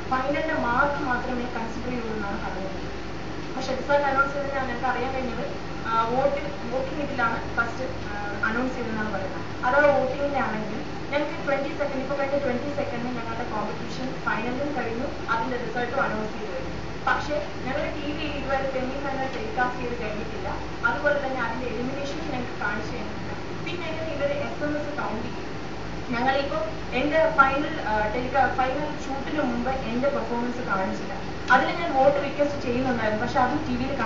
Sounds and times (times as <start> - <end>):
Speech: 0.1 - 2.9, 3.6 - 25.4, 26.1 - 34.0.